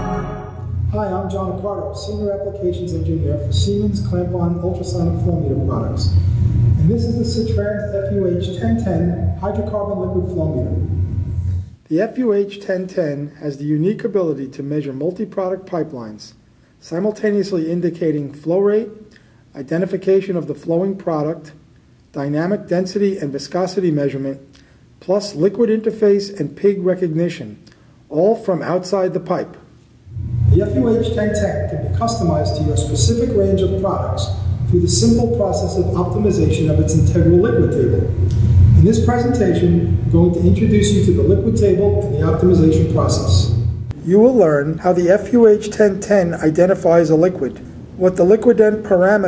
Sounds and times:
Speech: 0.9 - 11.0, 11.9 - 29.6, 30.5 - 38.2, 38.8 - 49.2.

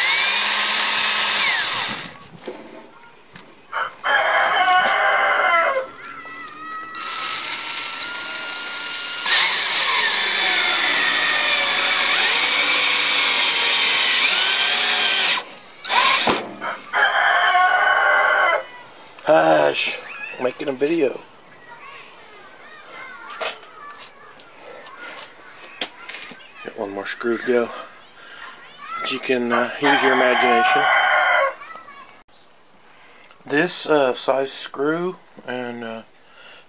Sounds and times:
Power tool: 0.0 - 2.2, 7.0 - 16.4.

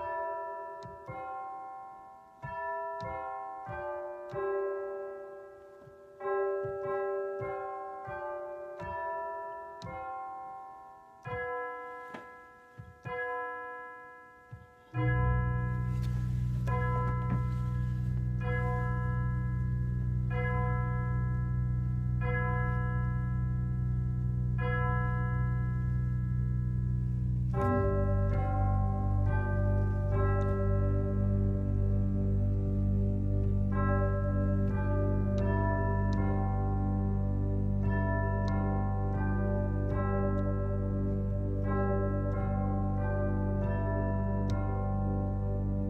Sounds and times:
Music: 0.0 - 45.8.

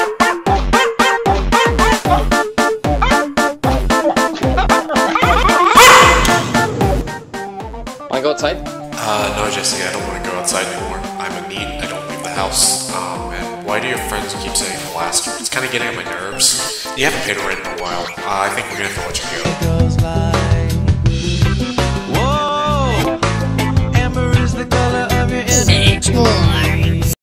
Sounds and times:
Music: 0.0 - 27.2
Speech: 8.1 - 19.6, 25.5 - 27.0.

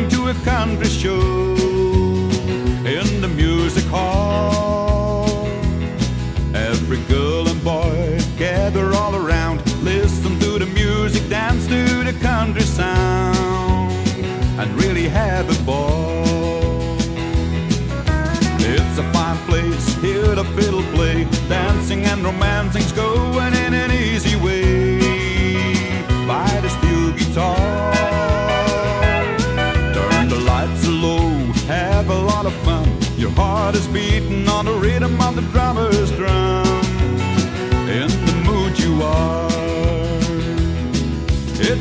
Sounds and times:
Exciting music: 27.4 - 31.3.

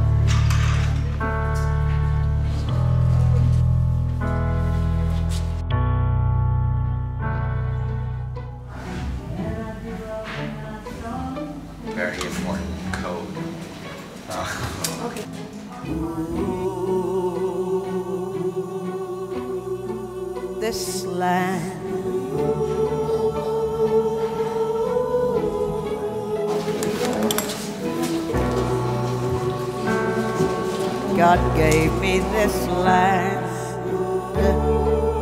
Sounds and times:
Music: 0.0 - 35.2.

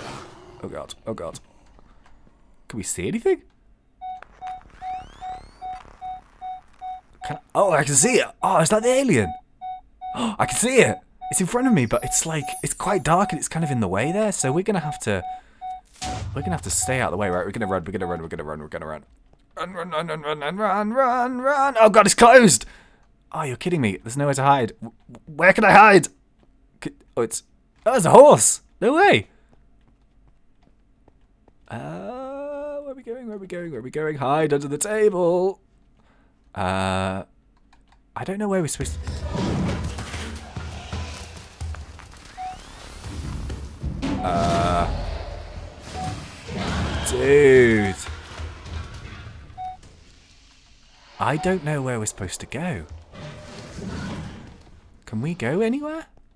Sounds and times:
Speech: 2.7 - 3.5, 7.3 - 9.3, 10.2 - 15.2, 16.4 - 19.0, 19.6 - 22.7, 23.3 - 26.1, 31.7 - 35.6, 47.0 - 48.1, 51.2 - 52.9, 55.1 - 56.1.

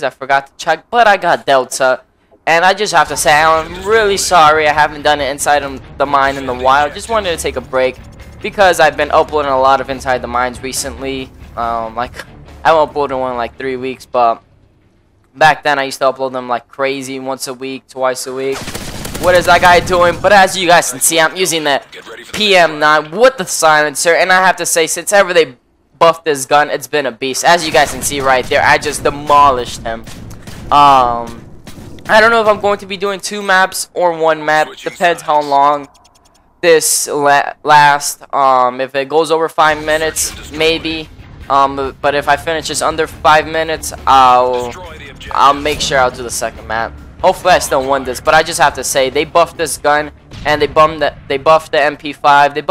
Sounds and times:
Speech: 0.0 - 14.4, 19.2 - 30.0, 30.7 - 31.4, 32.1 - 35.9, 36.7 - 52.7.

